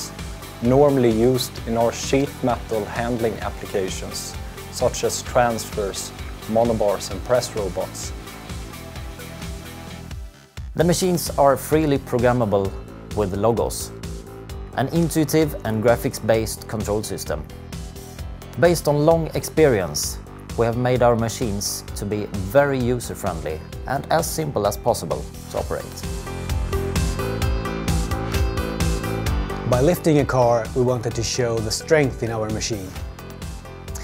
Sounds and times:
Music: 0.0 - 34.0
Speech: 0.6 - 8.1, 10.8 - 13.9, 14.8 - 17.5, 18.6 - 26.1, 29.7 - 33.0.

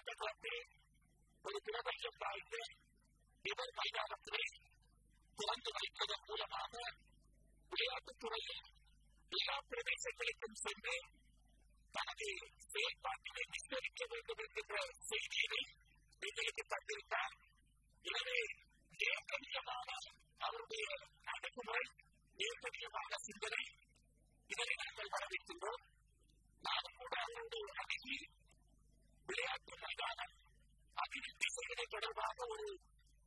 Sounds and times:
Male speech, man speaking: 0.0 - 0.7, 1.5 - 2.8, 3.5 - 4.6, 5.4 - 7.0, 7.7 - 8.7, 9.4 - 11.1, 12.0 - 17.4, 18.1 - 23.8, 24.5 - 25.8, 26.7 - 28.3, 29.3 - 30.4, 31.0 - 32.8
Narration, monologue: 0.0 - 33.2.

